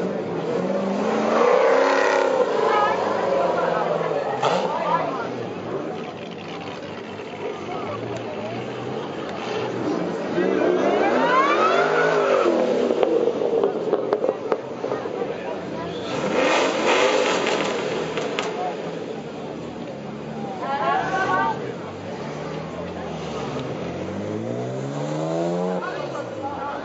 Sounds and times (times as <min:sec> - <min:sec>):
Speech: 0:02.3 - 0:12.5, 0:13.7 - 0:16.5, 0:18.3 - 0:24.1, 0:25.6 - 0:26.8.